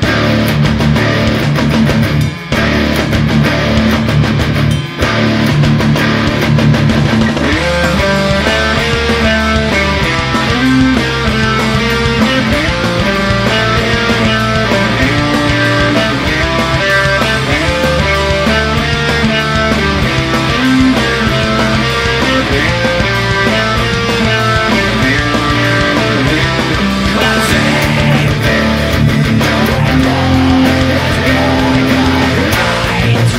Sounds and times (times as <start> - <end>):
Electric guitar: 0.0 - 33.3
Strum: 0.0 - 33.3.